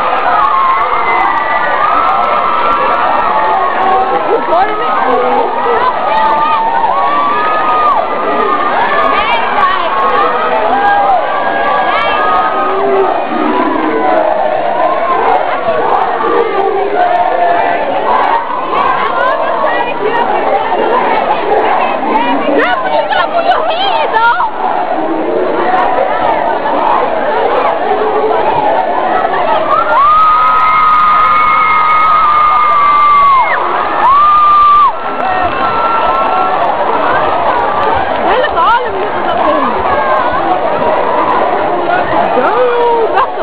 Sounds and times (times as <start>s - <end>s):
Inside, large room or hall: 0.0s - 43.4s
Inside, public space: 0.0s - 43.4s
Speech: 3.6s - 30.0s, 36.8s - 43.4s.